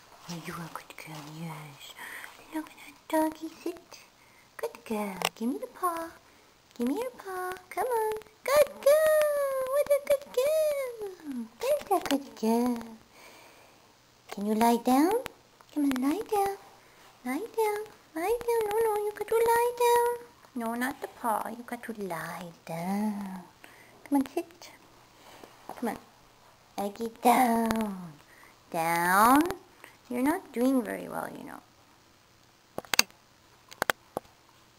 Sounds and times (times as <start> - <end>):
Speech: 0.3 - 13.0, 14.3 - 24.8, 25.8 - 26.1, 26.8 - 31.7.